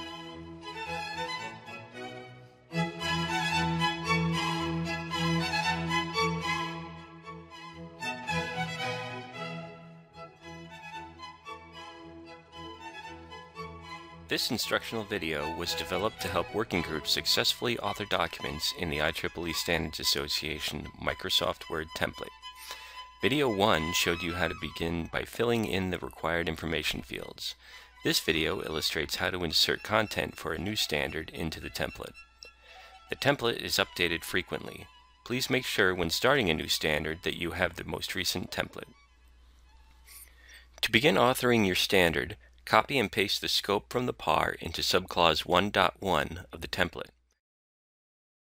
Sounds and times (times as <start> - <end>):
Music: 0.0 - 47.1
Speech: 14.3 - 22.3, 23.2 - 32.1, 33.1 - 39.0, 40.8 - 47.1.